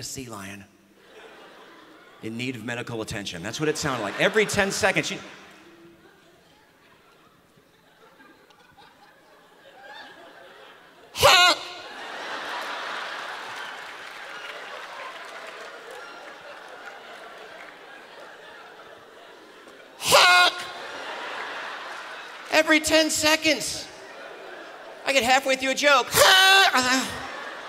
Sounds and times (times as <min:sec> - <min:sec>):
Speech: 0:00.0 - 0:00.7, 0:02.2 - 0:05.3, 0:25.0 - 0:27.3.